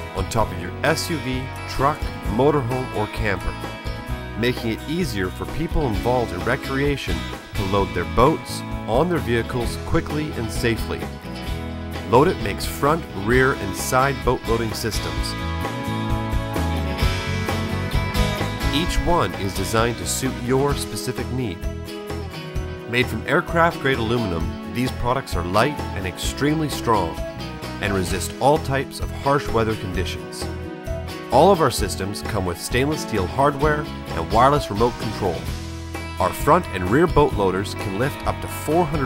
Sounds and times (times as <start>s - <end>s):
Speech: 0.0s - 3.6s, 4.4s - 11.1s, 12.0s - 15.3s, 18.7s - 21.7s, 22.9s - 27.2s, 27.8s - 30.5s, 31.3s - 35.5s, 36.2s - 39.0s
Music: 0.0s - 39.0s.